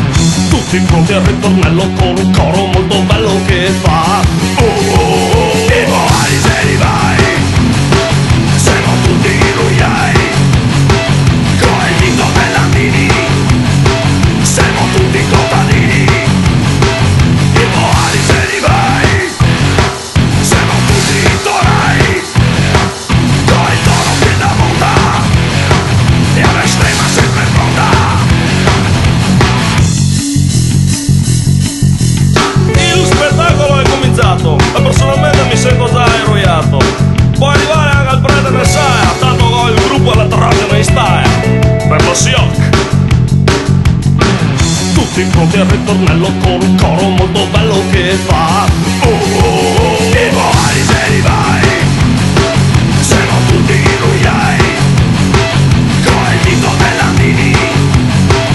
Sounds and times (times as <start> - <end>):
Music: 0.0 - 58.5.